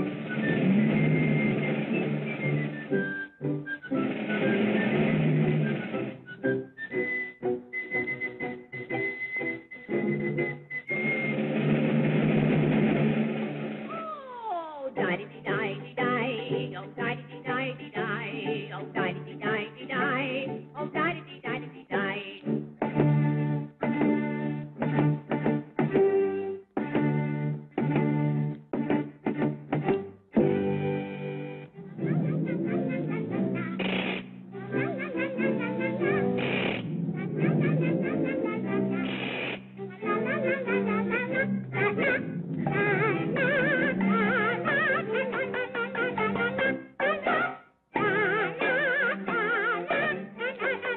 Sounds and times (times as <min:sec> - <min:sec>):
Music: 0:00.0 - 0:50.9.